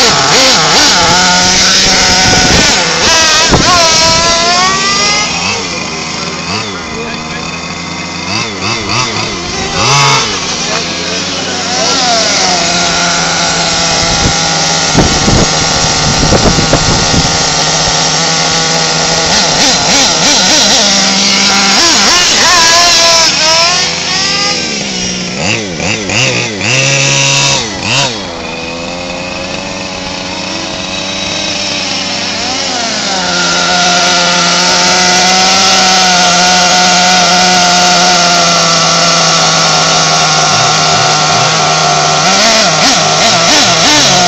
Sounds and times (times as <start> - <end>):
Speech: 6.6 - 7.6.